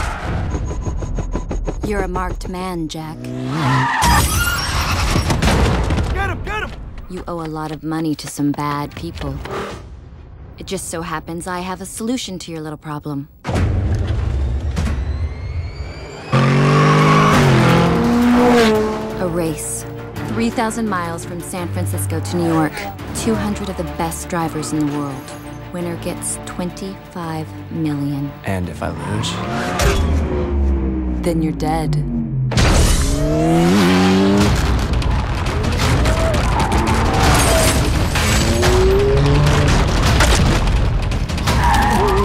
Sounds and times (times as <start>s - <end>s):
Speech: 1.9s - 3.2s, 6.2s - 9.4s, 10.6s - 13.3s, 19.2s - 25.2s, 31.2s - 32.1s.